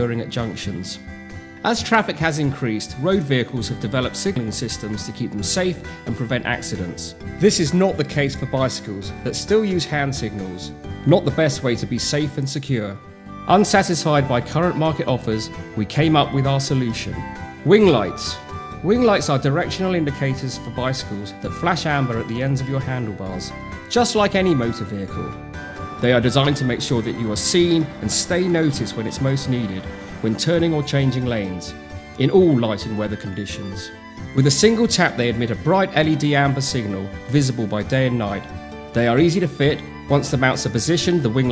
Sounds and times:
Speech: 0.0s - 1.0s, 1.6s - 25.3s, 26.0s - 41.5s
Music: 0.0s - 41.5s.

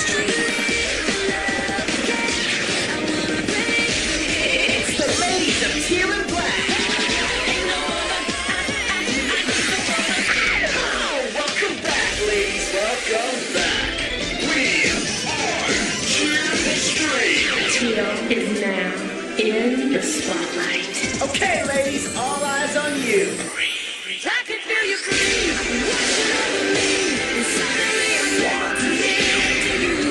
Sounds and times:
Music: 0.0s - 30.1s
Speech: 16.2s - 23.5s.

